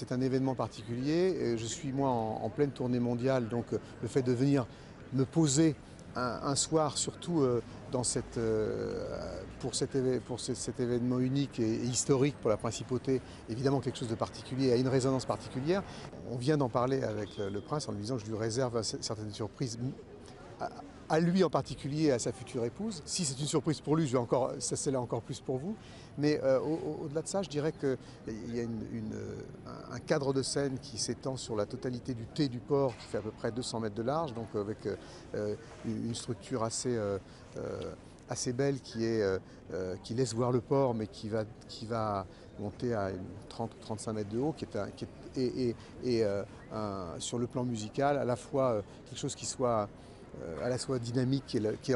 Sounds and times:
Speech: 0.0 - 51.9.

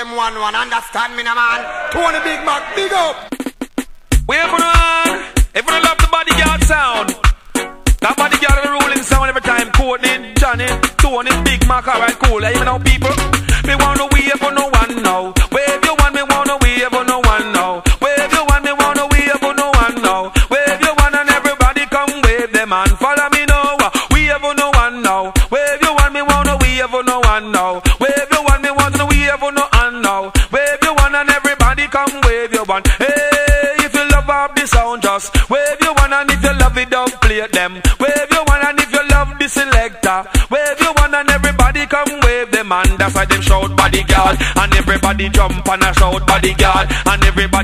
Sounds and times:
Music: 2.2 - 47.6.

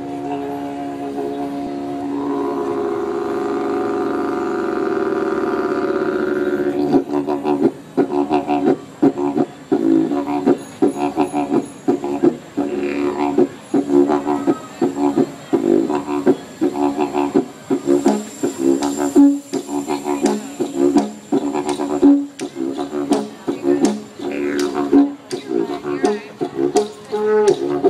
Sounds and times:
Didgeridoo: 0.0 - 27.8.

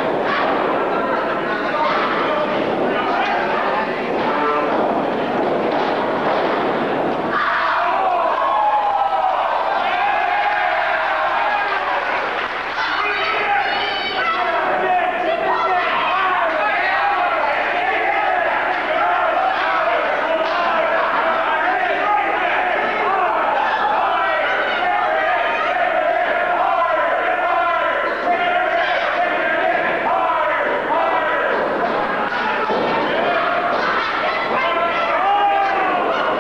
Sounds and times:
Speech: 0.2 - 4.8, 12.8 - 36.4.

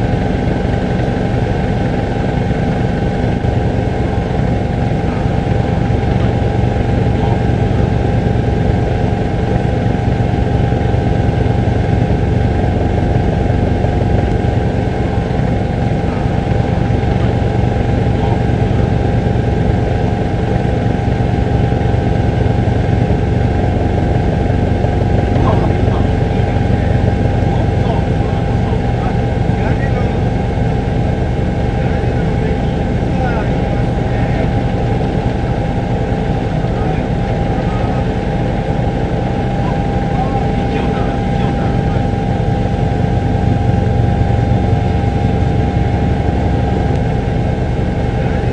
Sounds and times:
Speech: 25.4 - 30.4, 31.8 - 34.7, 36.5 - 38.2, 39.6 - 42.1.

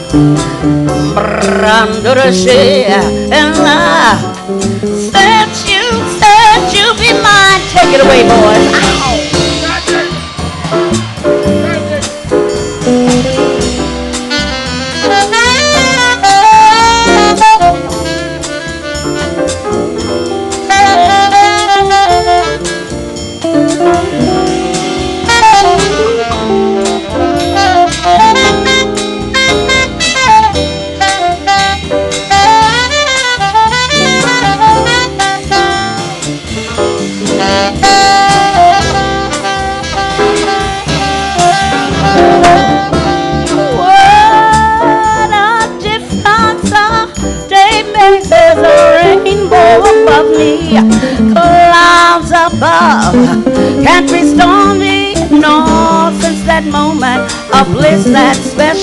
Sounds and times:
Jazz: 0.0 - 58.8.

